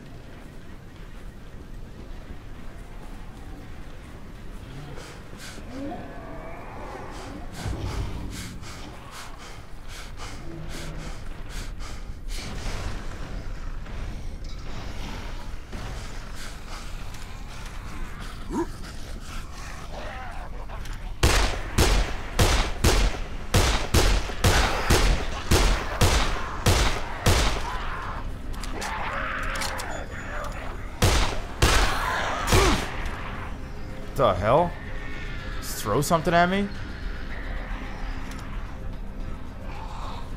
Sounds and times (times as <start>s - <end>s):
Fusillade: 21.2s - 27.8s, 31.0s - 32.9s.